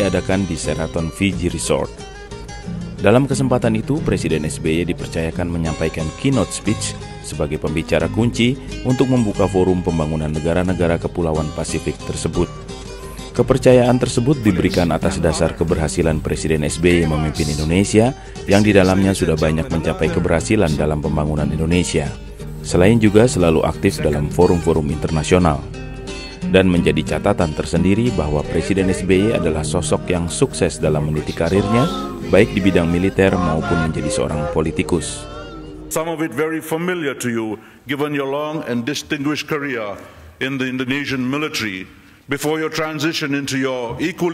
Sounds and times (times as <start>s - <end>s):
Male speech, man speaking: 0.0s - 1.9s, 3.0s - 12.5s, 13.4s - 25.7s, 26.5s - 35.2s, 35.9s - 44.3s
Music: 0.0s - 37.8s
Narration, monologue: 0.0s - 44.3s.